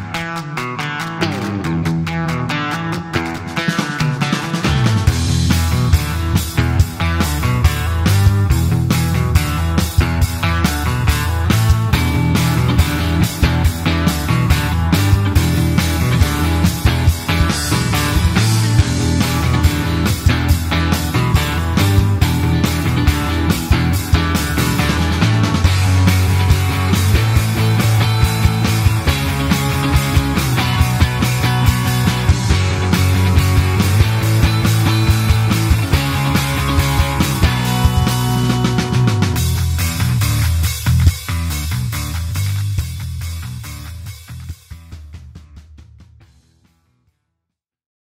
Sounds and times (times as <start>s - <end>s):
Music: 0.0s - 47.5s.